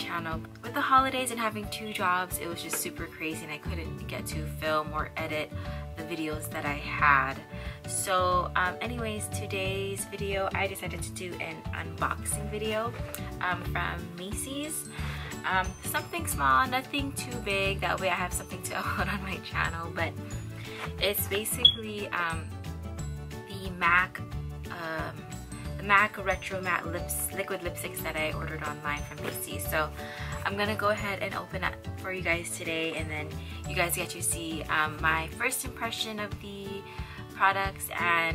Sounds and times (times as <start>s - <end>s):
Speech: 0.0s - 20.2s, 21.0s - 22.5s, 23.5s - 25.2s, 25.8s - 38.3s
Music: 0.0s - 38.3s.